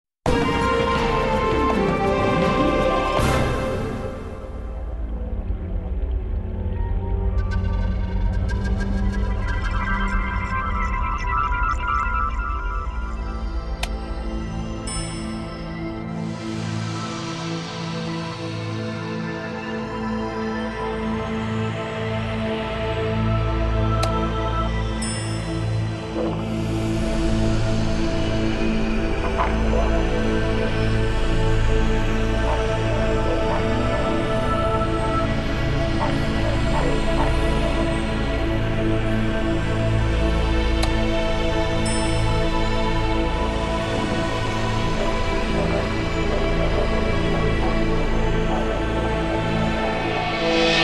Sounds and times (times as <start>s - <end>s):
Music: 0.0s - 50.8s.